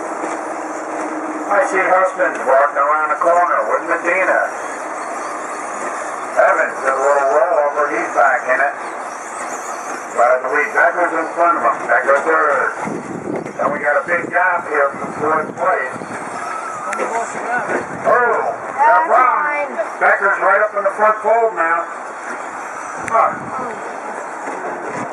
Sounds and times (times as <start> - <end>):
Speech: 1.5 - 4.6, 6.4 - 8.8, 10.2 - 12.8, 13.6 - 16.0.